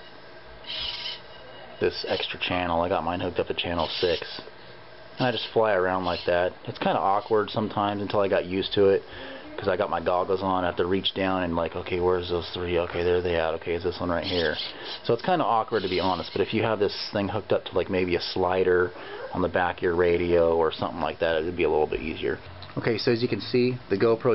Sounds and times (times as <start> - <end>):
Speech: 1.8 - 4.5, 5.2 - 24.3.